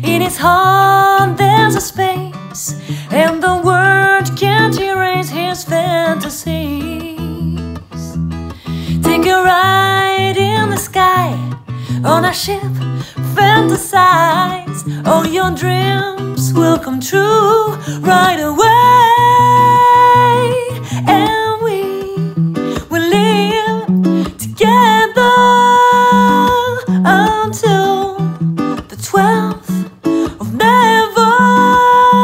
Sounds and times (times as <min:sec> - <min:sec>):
Music: 0:00.0 - 0:32.2.